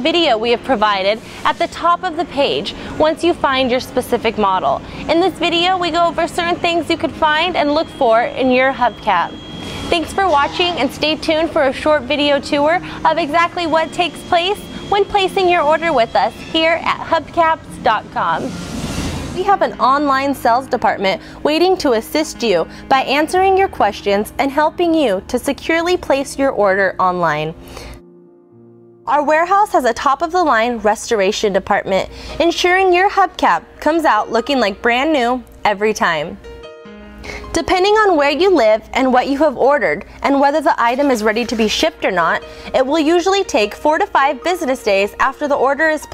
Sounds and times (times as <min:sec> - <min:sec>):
Speech: 0:00.0 - 0:09.3, 0:10.0 - 0:18.5, 0:29.1 - 0:36.4, 0:37.6 - 0:46.1.